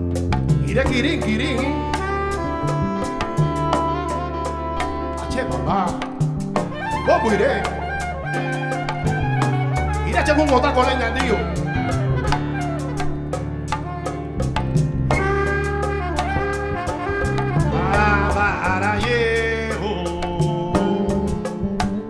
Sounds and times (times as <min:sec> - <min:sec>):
Drum: 0:00.0 - 0:22.0.